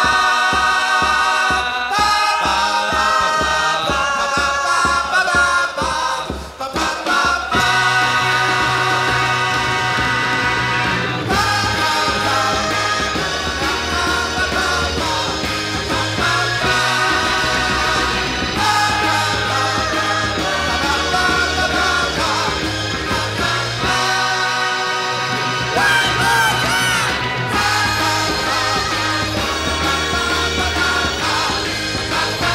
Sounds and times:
Rock and roll: 0:00.0 - 0:32.5.

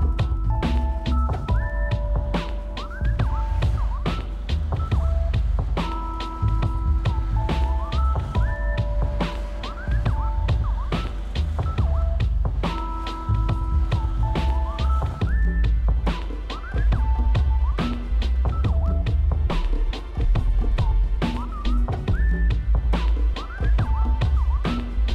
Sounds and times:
Music: 0:00.0 - 0:25.1.

